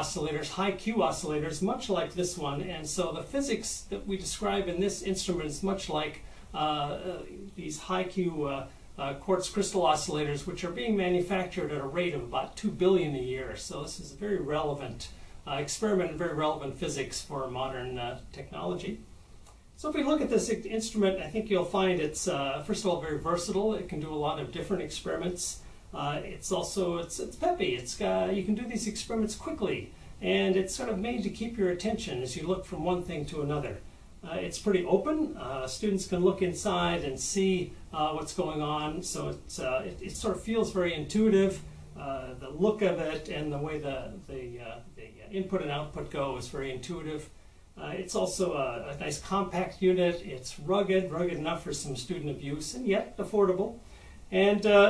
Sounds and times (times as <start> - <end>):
Speech: 0.0 - 19.1, 19.8 - 54.9.